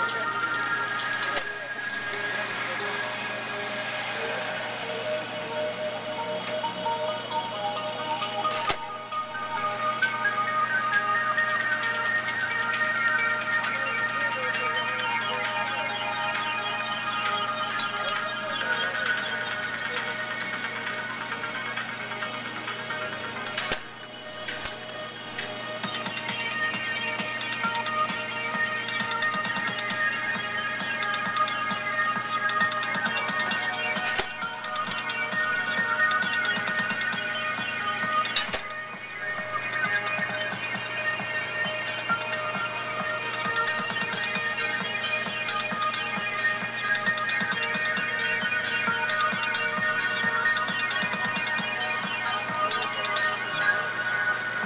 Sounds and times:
Speech: 0.0s - 5.6s, 13.6s - 21.4s
Music: 0.0s - 54.6s.

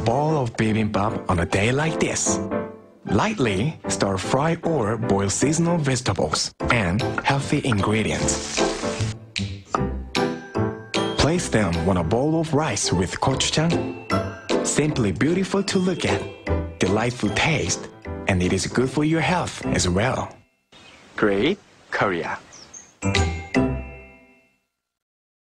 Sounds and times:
Speech: 0.0s - 2.4s, 3.1s - 8.4s, 11.2s - 13.8s, 14.7s - 20.4s, 21.2s - 22.5s
Music: 0.0s - 20.7s, 23.0s - 24.9s.

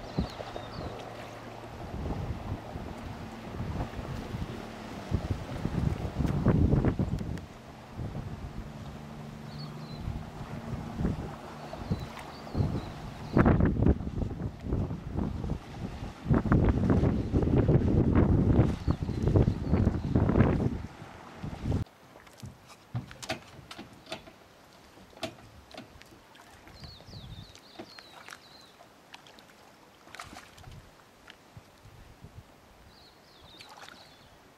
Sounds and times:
Motorboat, speedboat: 0.0s - 34.5s.

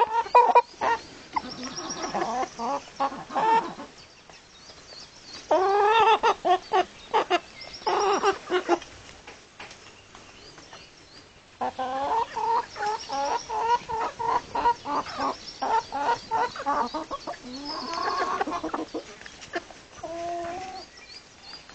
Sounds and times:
Cluck: 0.0s - 3.9s, 5.4s - 8.9s, 11.6s - 20.9s.

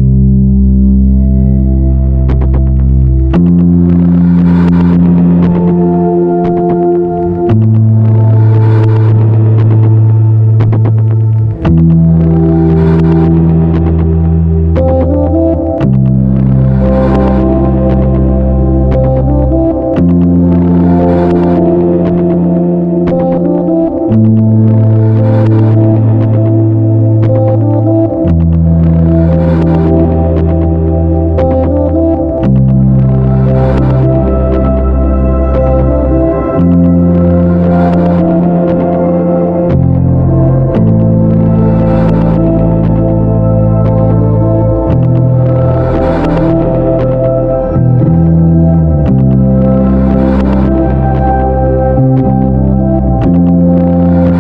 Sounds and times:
Music: 0.0s - 54.4s.

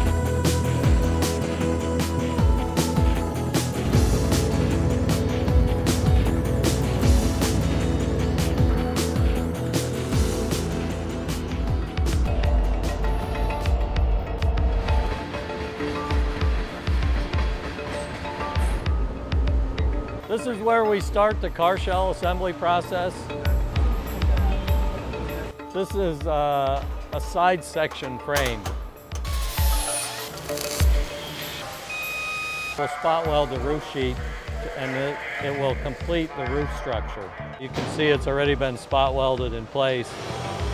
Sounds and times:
Music: 0.0s - 40.7s.

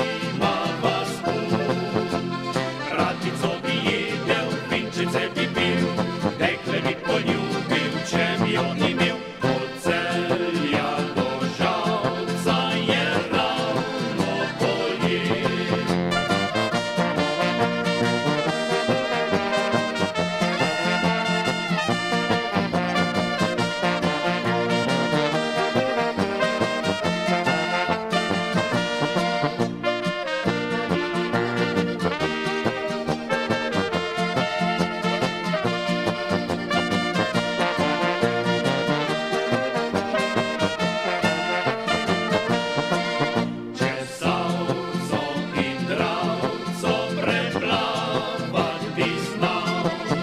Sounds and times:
Accordion: 0.0s - 50.2s.

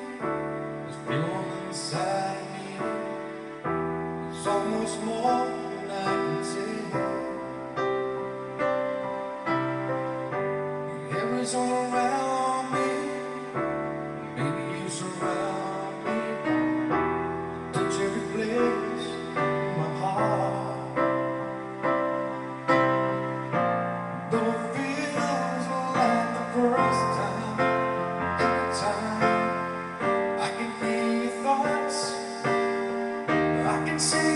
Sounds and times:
Male singing: 0.0s - 3.4s, 4.3s - 7.6s, 11.0s - 13.6s, 14.4s - 16.6s, 17.8s - 21.2s, 24.3s - 34.3s
Music: 0.0s - 34.3s.

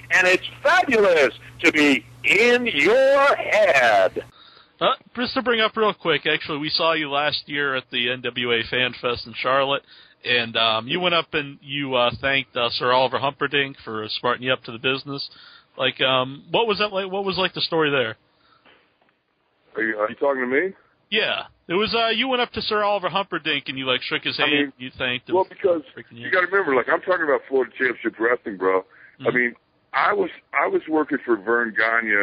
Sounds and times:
Speech: 0.0s - 18.2s, 19.7s - 32.2s.

